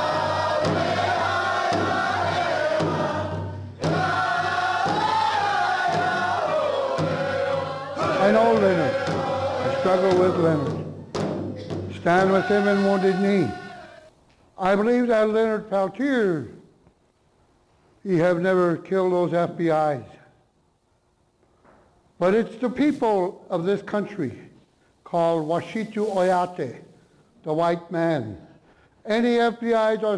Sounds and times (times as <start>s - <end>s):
Music: 0.0s - 13.9s.